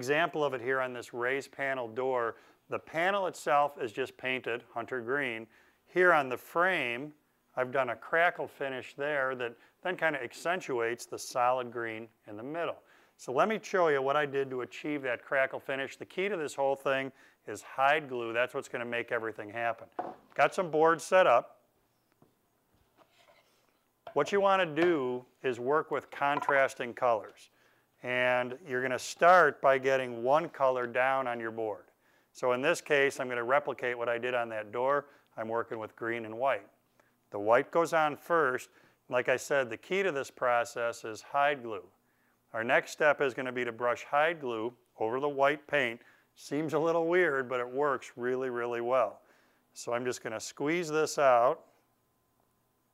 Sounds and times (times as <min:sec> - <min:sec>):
Speech: 0:00.0 - 0:21.6, 0:24.1 - 0:36.7, 0:37.3 - 0:41.9, 0:42.5 - 0:49.2, 0:49.8 - 0:51.6.